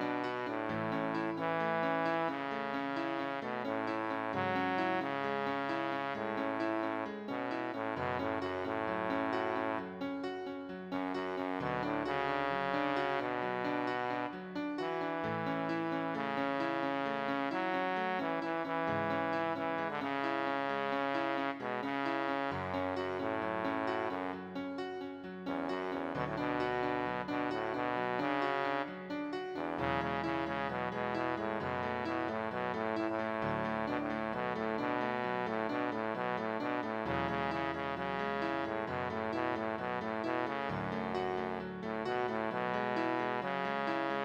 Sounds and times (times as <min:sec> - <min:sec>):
Music: 0:00.0 - 0:44.2.